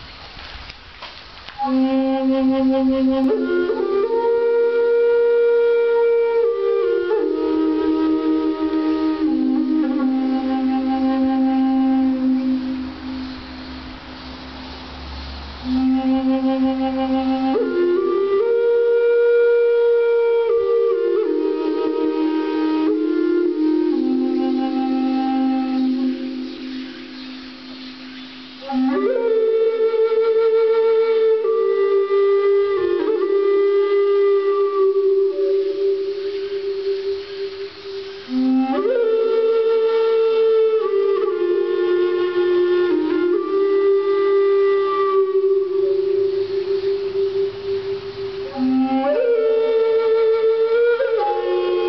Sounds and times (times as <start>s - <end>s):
Flute: 1.5s - 51.8s.